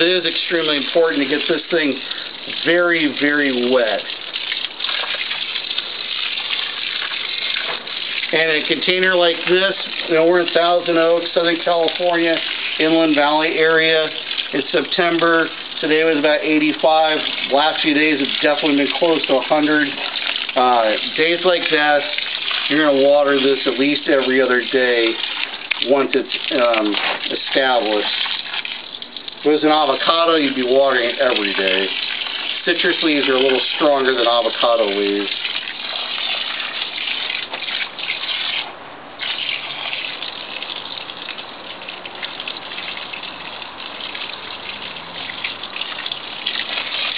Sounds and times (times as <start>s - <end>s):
Speech: 0.0s - 2.0s, 2.6s - 4.1s, 8.3s - 20.0s, 20.6s - 25.2s, 25.8s - 28.1s, 29.5s - 31.9s, 32.6s - 35.3s.